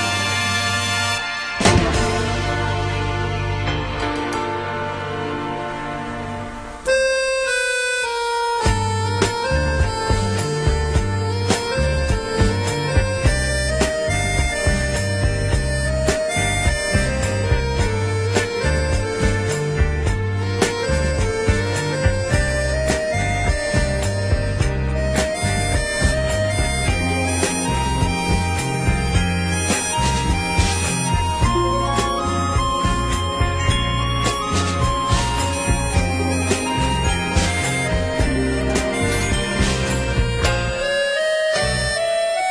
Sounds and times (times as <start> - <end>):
Bagpipes: 0.0 - 4.3, 6.5 - 42.5.